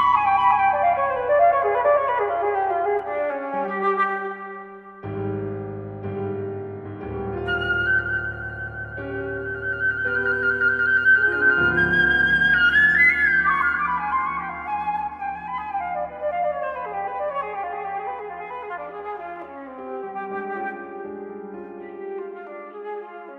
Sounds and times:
Music: 0.0 - 23.3.

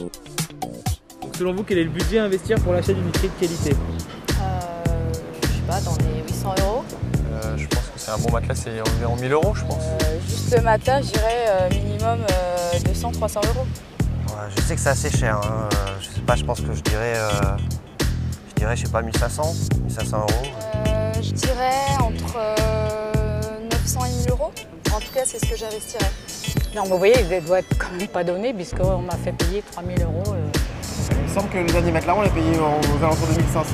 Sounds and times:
Music: 0.0 - 33.7
Speech: 14.3 - 17.6.

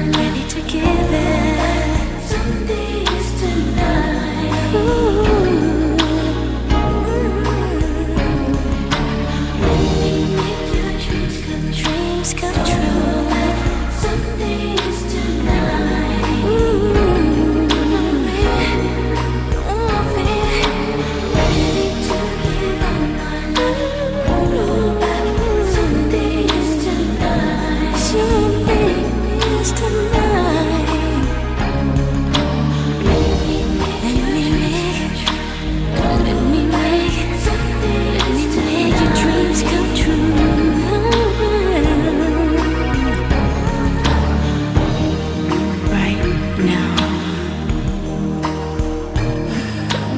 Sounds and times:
Pop music: 0.0 - 50.1.

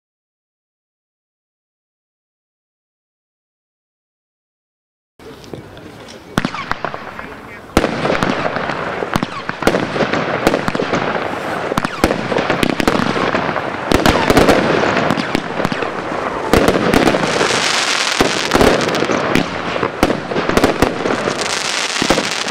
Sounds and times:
Speech: 5.2 - 7.8
Fireworks: 5.2 - 22.5.

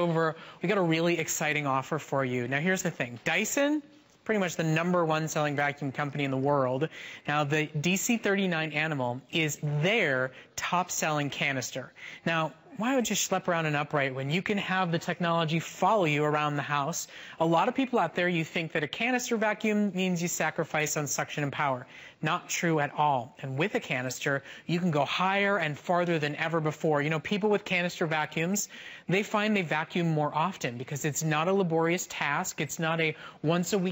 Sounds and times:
Speech: 0.0 - 33.9.

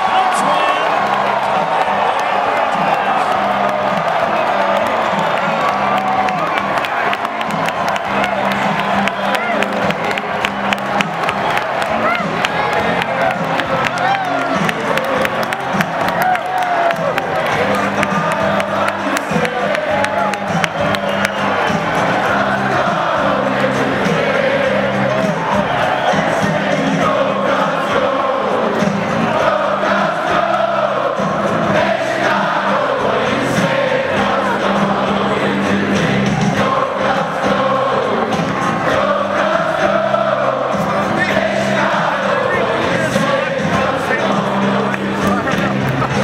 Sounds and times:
Music: 0.0 - 46.2.

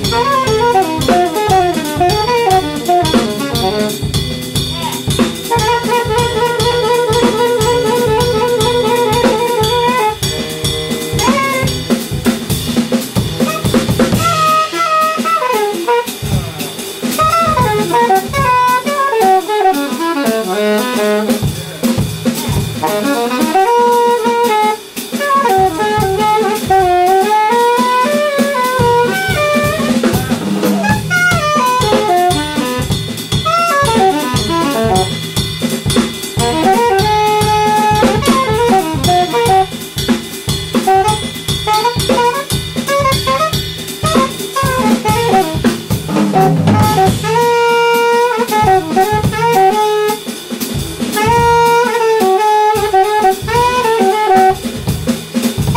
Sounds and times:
Brass instrument: 0.0 - 55.7
Drum: 0.0 - 55.7
Drum kit: 0.0 - 55.7
Jazz: 0.0 - 55.7
Saxophone: 0.0 - 55.7.

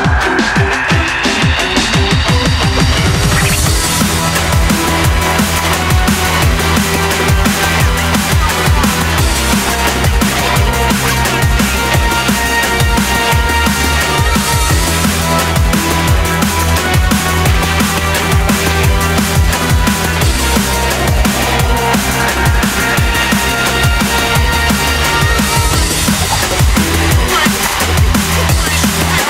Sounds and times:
Drum: 0.0 - 29.3.

